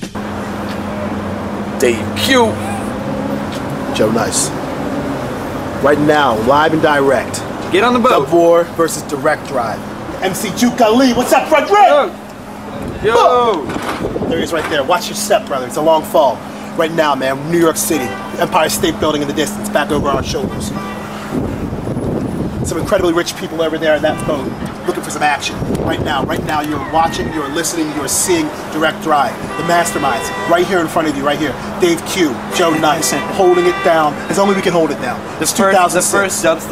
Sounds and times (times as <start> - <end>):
Speech: 1.8 - 2.7, 14.3 - 20.8, 22.7 - 36.7
Boat, Water vehicle: 17.4 - 31.0.